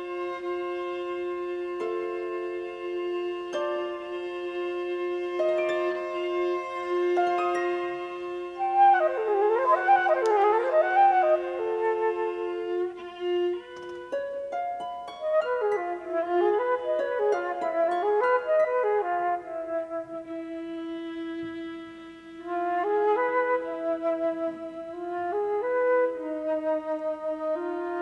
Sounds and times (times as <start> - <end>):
Harp: 0.0 - 28.0.